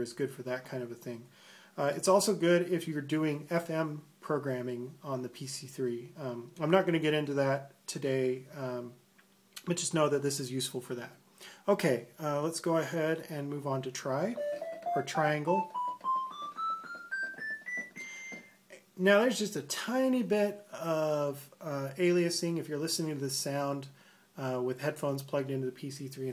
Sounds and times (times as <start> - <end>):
Speech: 0.0 - 9.0, 9.6 - 14.4, 15.0 - 15.7, 19.0 - 26.3
Inside, small room: 0.0 - 26.3
Music: 14.4 - 18.5.